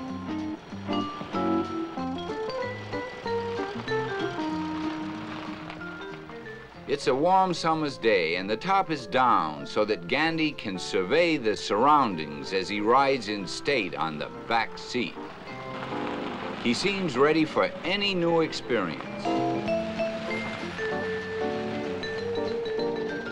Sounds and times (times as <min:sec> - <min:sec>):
Music: 0:00.0 - 0:23.3
Speech: 0:06.9 - 0:15.2, 0:16.6 - 0:19.0.